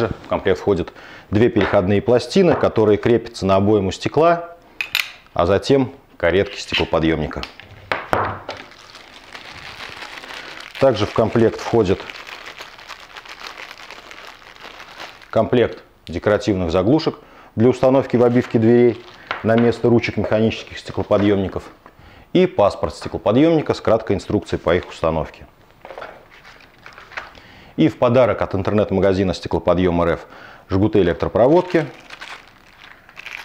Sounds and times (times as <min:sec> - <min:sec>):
Speech: 0:00.0 - 0:04.6, 0:05.4 - 0:07.5, 0:10.8 - 0:12.1, 0:15.3 - 0:25.5, 0:27.8 - 0:32.0
Crumpling, crinkling: 0:08.5 - 0:15.5, 0:18.0 - 0:21.6, 0:25.8 - 0:27.4, 0:31.4 - 0:33.4.